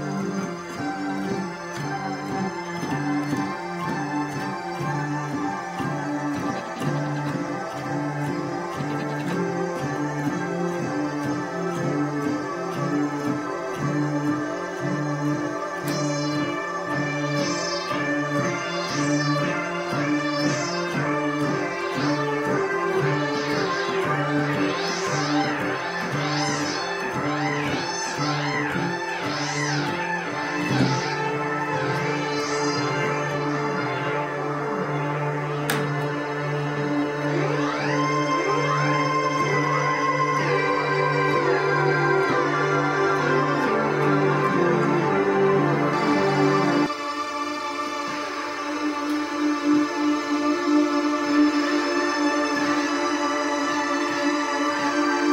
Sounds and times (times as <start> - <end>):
Music: 0.0 - 55.3.